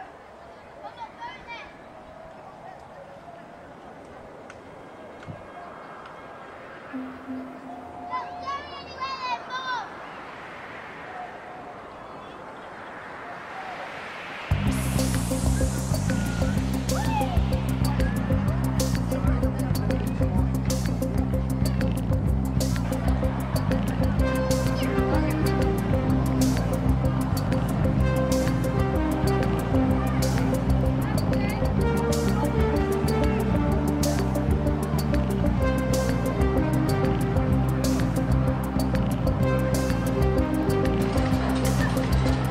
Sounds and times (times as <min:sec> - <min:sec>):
Music: 0:06.9 - 0:08.7, 0:14.5 - 0:42.5
Speech: 0:08.0 - 0:09.9, 0:18.8 - 0:20.8, 0:29.9 - 0:33.5.